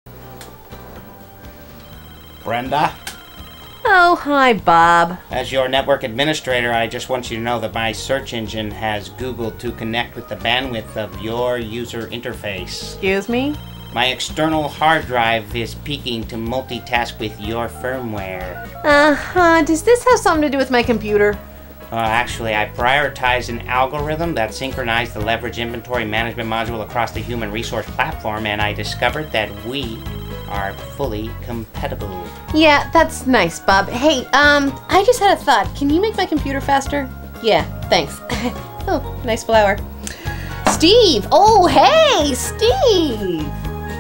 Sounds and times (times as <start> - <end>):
Speech: 21.9 - 35.2, 40.8 - 43.5.